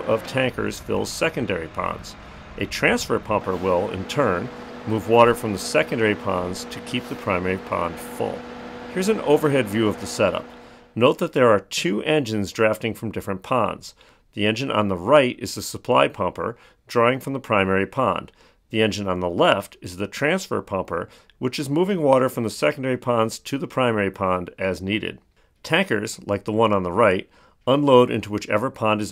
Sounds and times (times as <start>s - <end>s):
Speech: 0.0s - 29.1s.